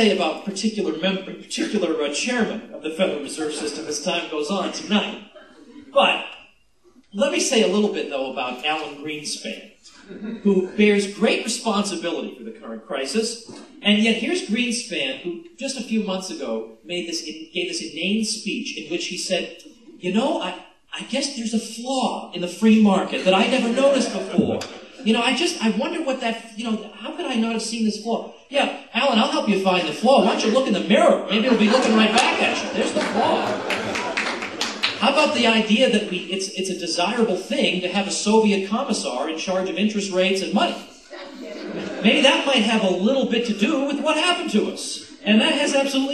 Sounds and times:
Male speech, man speaking: 0.0s - 6.3s, 7.1s - 9.8s, 10.4s - 33.7s, 35.0s - 40.9s, 41.8s - 46.1s
Narration, monologue: 0.0s - 46.1s.

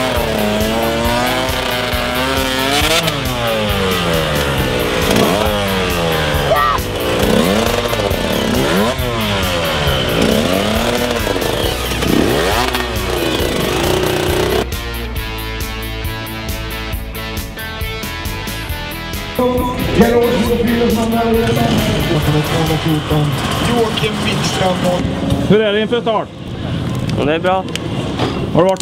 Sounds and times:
Rock and roll: 0.0s - 25.1s
Speech: 19.4s - 26.3s, 27.2s - 27.7s, 28.5s - 28.8s.

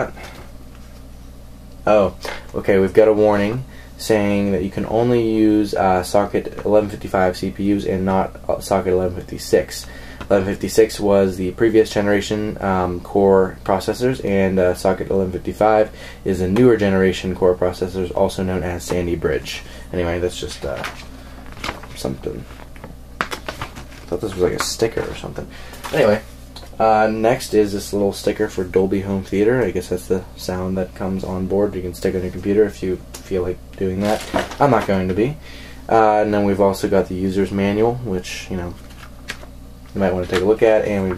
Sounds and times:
Speech: 0.0s - 0.2s, 1.8s - 21.0s, 21.9s - 22.6s, 24.1s - 38.8s, 39.9s - 41.1s
Inside, small room: 0.0s - 41.1s.

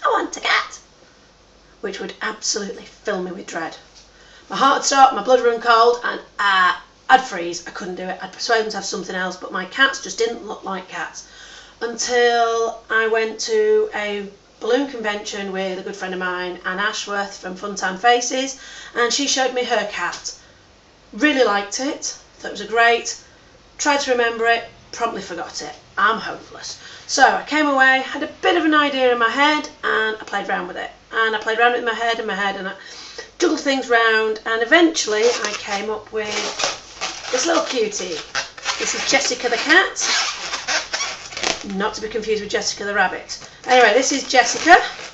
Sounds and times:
Speech: 0.0s - 0.9s, 1.8s - 3.9s, 4.5s - 20.4s, 21.2s - 23.2s, 23.8s - 40.2s, 41.5s - 45.1s.

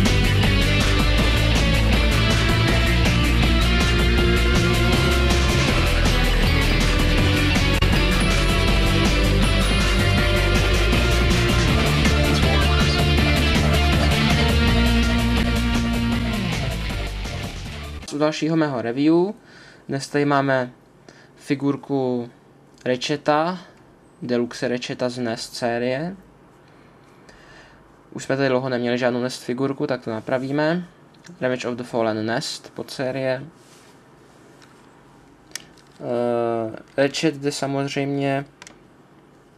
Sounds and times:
Speech: 18.1s - 20.8s, 21.4s - 26.2s, 28.1s - 33.6s, 36.0s - 38.6s.

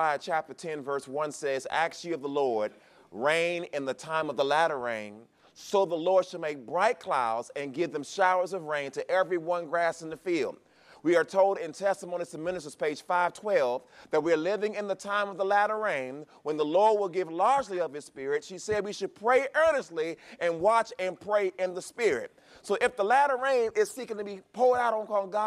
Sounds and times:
Speech: 0.0s - 25.4s.

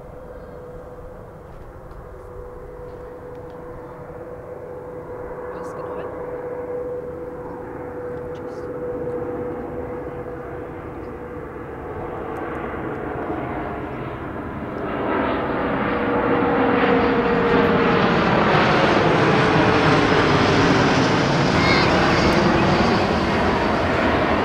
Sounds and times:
Aircraft: 0.0s - 24.4s
Outside, urban or manmade: 0.0s - 24.4s
Speech: 5.5s - 6.1s.

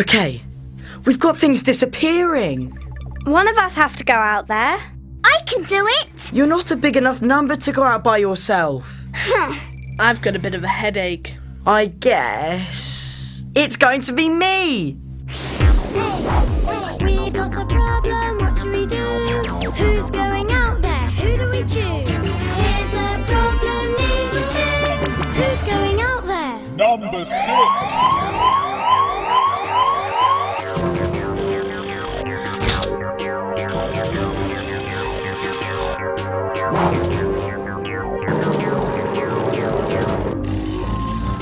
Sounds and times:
Music: 0.0s - 41.4s.

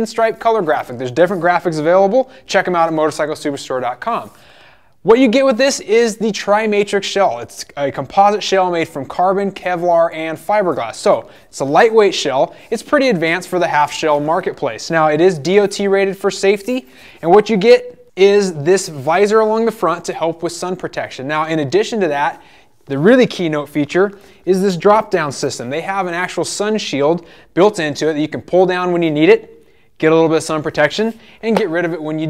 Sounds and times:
Speech: 0.0s - 4.4s, 5.0s - 32.3s.

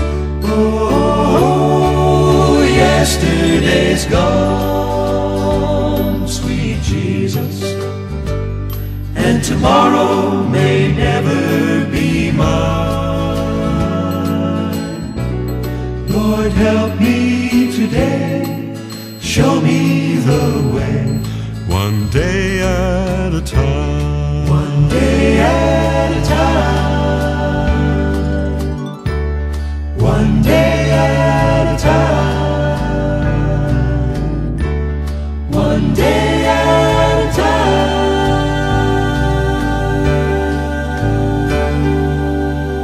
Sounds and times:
Happy music: 0.0s - 42.8s.

